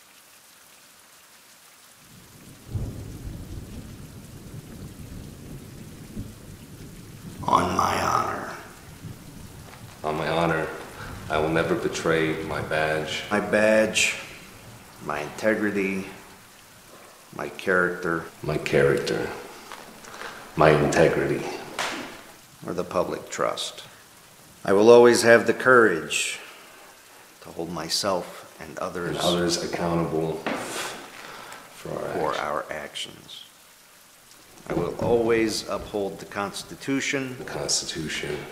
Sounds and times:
Speech: 0:07.4 - 0:08.7, 0:10.0 - 0:14.3, 0:15.0 - 0:16.2, 0:17.4 - 0:19.4, 0:20.6 - 0:21.7, 0:22.6 - 0:23.9, 0:24.6 - 0:26.5, 0:27.4 - 0:31.0, 0:31.8 - 0:33.5, 0:34.7 - 0:38.5.

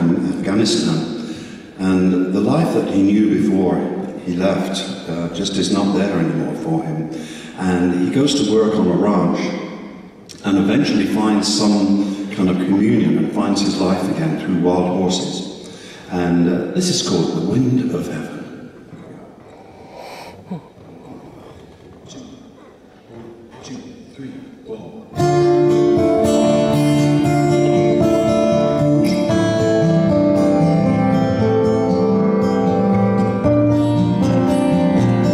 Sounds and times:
Speech: 0:00.0 - 0:01.2, 0:01.8 - 0:09.7, 0:10.3 - 0:15.5, 0:16.1 - 0:19.3, 0:22.0 - 0:22.4, 0:23.1 - 0:25.1.

